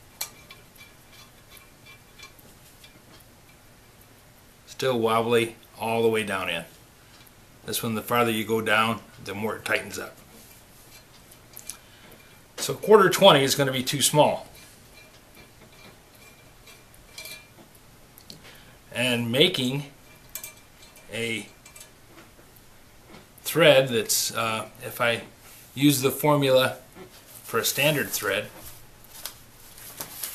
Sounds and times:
Tools: 0.0s - 3.6s, 14.5s - 17.7s, 20.1s - 22.3s
Inside, small room: 0.0s - 30.3s
Speech: 4.7s - 6.8s, 7.7s - 10.2s, 12.6s - 14.6s, 18.9s - 20.0s, 21.1s - 21.5s, 23.4s - 26.8s, 27.5s - 28.6s.

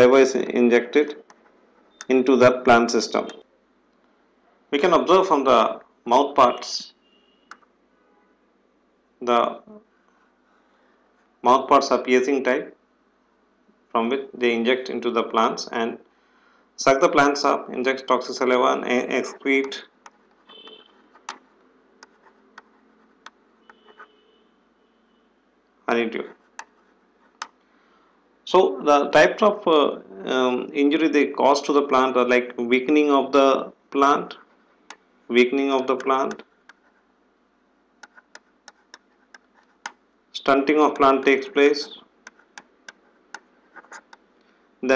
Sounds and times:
Speech: 0.0s - 1.2s, 2.0s - 3.4s, 4.8s - 6.9s, 9.2s - 9.8s, 11.4s - 12.8s, 13.9s - 16.0s, 16.8s - 19.9s, 25.9s - 26.4s, 28.5s - 34.5s, 35.3s - 36.4s, 40.4s - 42.0s.

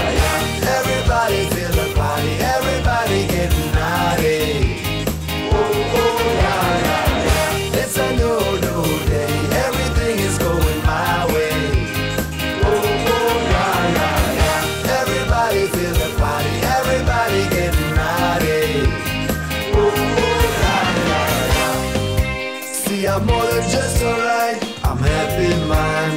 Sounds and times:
Singing: 0.0s - 21.9s, 22.7s - 26.1s
Jingle (music): 0.0s - 26.1s.

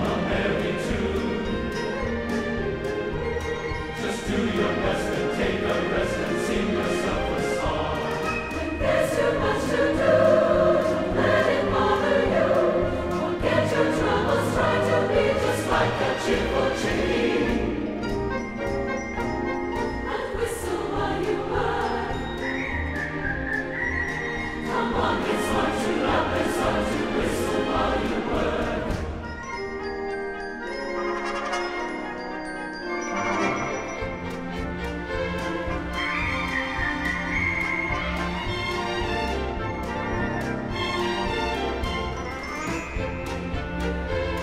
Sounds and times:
Orchestra: 0.0s - 44.4s.

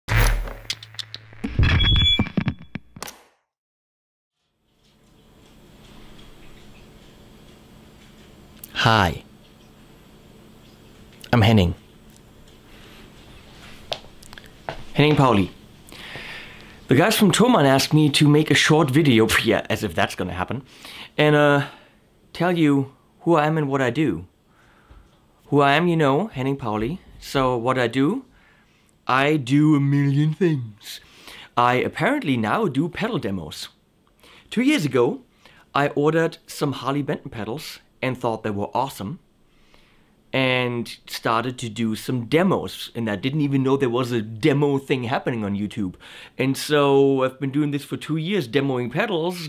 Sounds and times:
Speech: 8.6s - 9.3s, 11.2s - 11.8s, 14.9s - 15.6s, 16.9s - 24.3s, 25.5s - 28.3s, 29.0s - 31.0s, 31.6s - 33.8s, 34.5s - 35.2s, 35.8s - 39.2s, 40.3s - 49.4s.

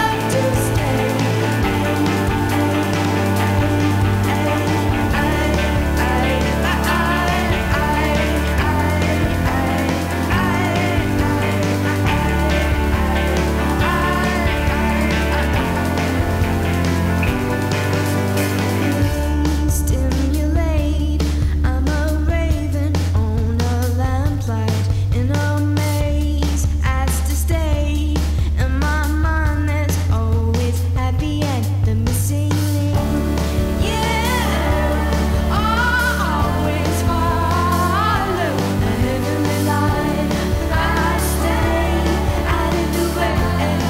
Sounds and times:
Psychedelic rock: 0.0s - 21.6s, 32.9s - 43.9s.

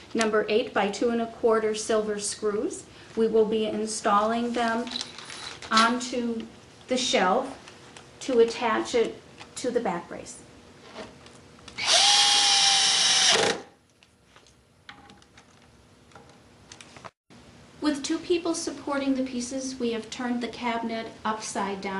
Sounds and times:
Speech: 0.1s - 5.0s, 5.7s - 7.6s, 8.2s - 10.5s, 17.8s - 21.9s.

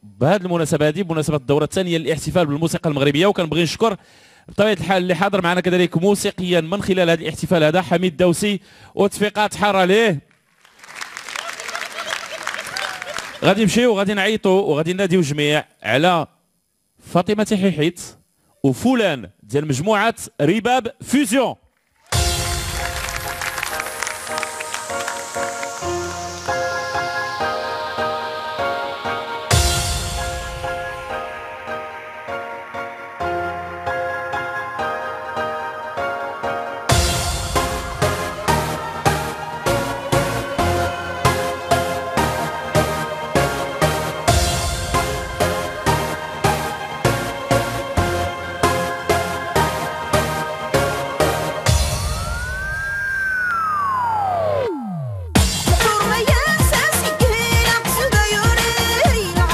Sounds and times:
Speech: 0.1s - 10.2s, 13.4s - 16.3s, 17.0s - 21.6s.

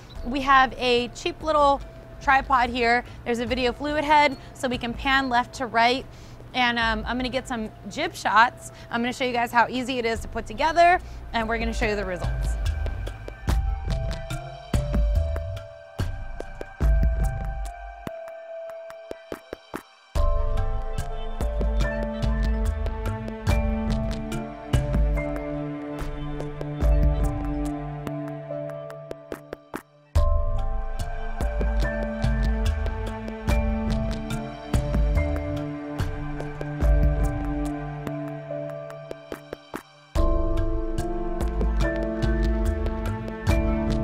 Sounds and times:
Music: 0.0s - 44.0s
Speech: 6.6s - 12.6s.

